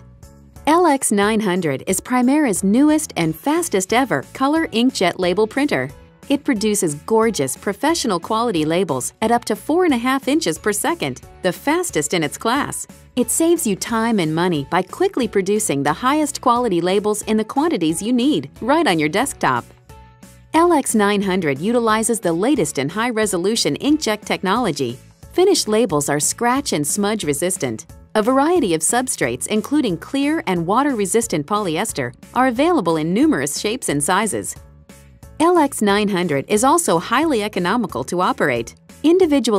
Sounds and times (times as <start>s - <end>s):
Music: 0.0s - 39.5s
Speech: 0.7s - 19.7s, 20.6s - 34.6s, 35.4s - 39.5s.